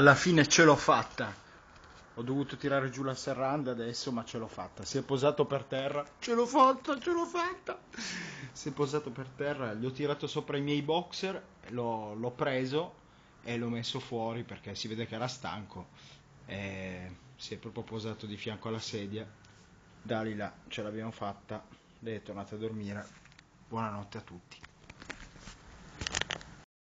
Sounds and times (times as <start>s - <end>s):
Speech: 0.0s - 1.4s, 2.2s - 7.8s, 8.6s - 15.9s, 16.5s - 19.4s, 20.0s - 24.7s.